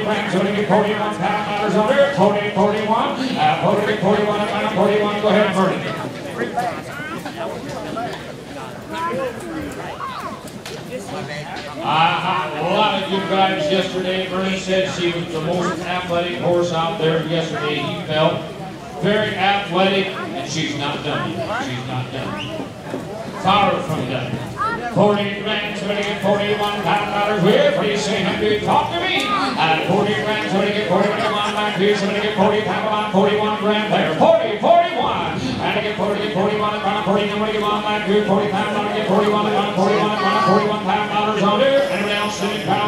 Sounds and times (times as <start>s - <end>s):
Speech: 0.0s - 42.8s.